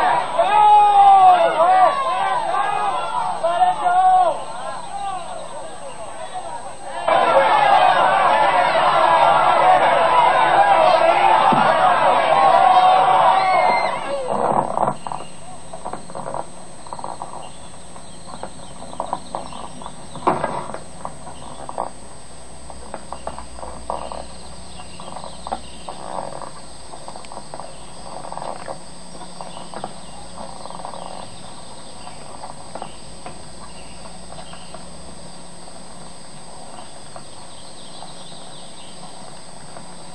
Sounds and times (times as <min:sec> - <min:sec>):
Outside, rural or natural: 0:00.0 - 0:40.1.